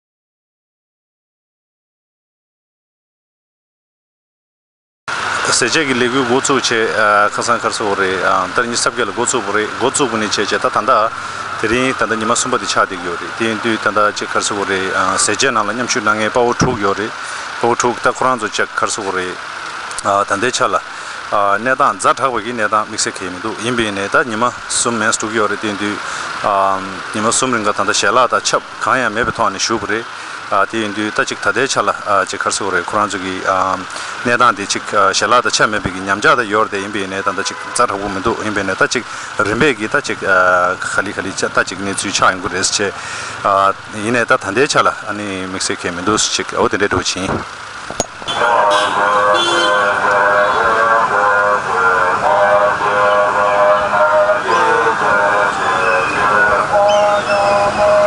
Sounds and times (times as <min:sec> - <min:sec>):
Speech: 0:05.4 - 0:19.4, 0:20.0 - 0:47.5.